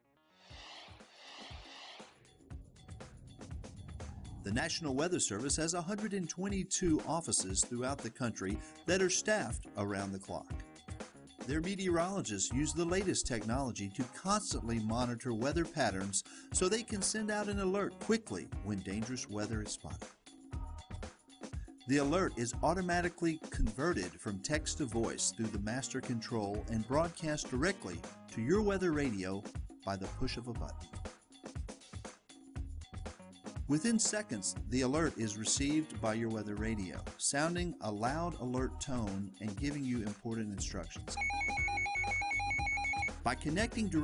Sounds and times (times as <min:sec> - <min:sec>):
Music: 0:00.0 - 0:44.0
Speech: 0:04.5 - 0:10.6, 0:11.5 - 0:20.0, 0:21.9 - 0:30.8, 0:33.7 - 0:41.2, 0:43.3 - 0:44.0.